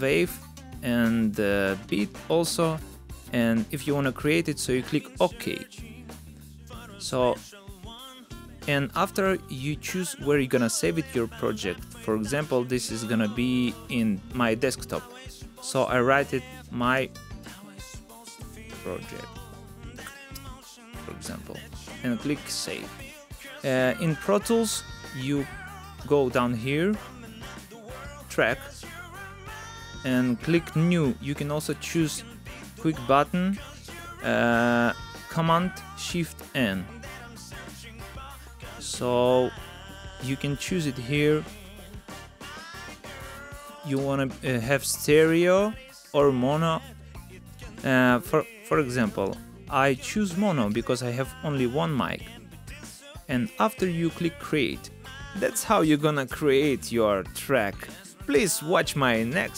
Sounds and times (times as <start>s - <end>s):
Speech: 0.0s - 2.8s, 3.4s - 5.8s, 6.9s - 7.6s, 8.6s - 17.2s, 18.7s - 19.4s, 21.0s - 27.1s, 28.3s - 28.8s, 30.1s - 32.2s, 32.8s - 37.2s, 38.7s - 39.6s, 40.2s - 41.6s, 43.9s - 46.8s, 47.8s - 52.3s, 53.3s - 59.5s
Music: 0.0s - 59.5s.